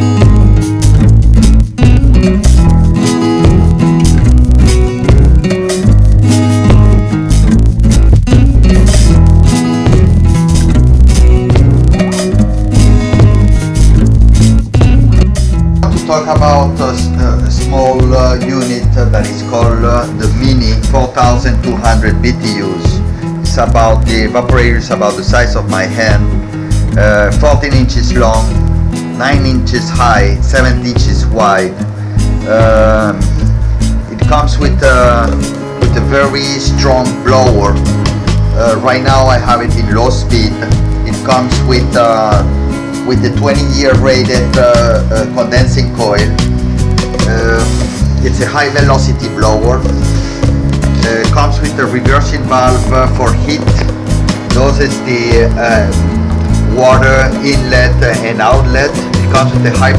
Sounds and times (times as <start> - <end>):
Music: 0.0 - 59.9
Speech: 15.8 - 26.3, 26.9 - 28.6, 29.2 - 31.8, 32.4 - 33.3, 34.1 - 37.8, 38.6 - 42.5, 43.1 - 46.4, 47.2 - 50.0, 51.0 - 53.9, 54.5 - 56.0, 56.7 - 59.9.